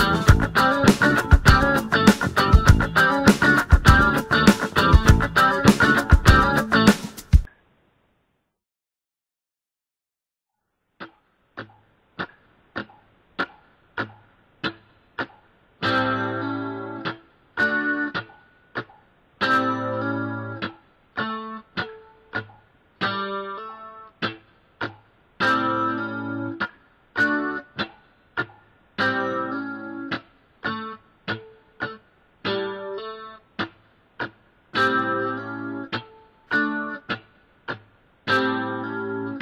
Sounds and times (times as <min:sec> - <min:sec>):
Electric guitar: 0:00.0 - 0:07.5, 0:11.0 - 0:39.4.